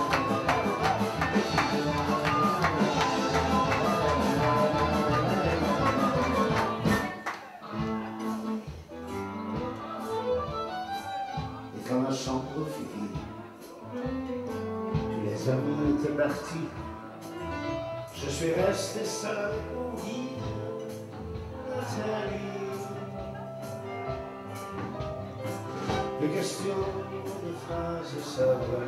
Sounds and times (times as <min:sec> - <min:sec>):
Traditional music: 0:00.0 - 0:15.1
Rhythm and blues: 0:00.0 - 0:28.8
Speech: 0:11.6 - 0:13.9, 0:15.1 - 0:16.8.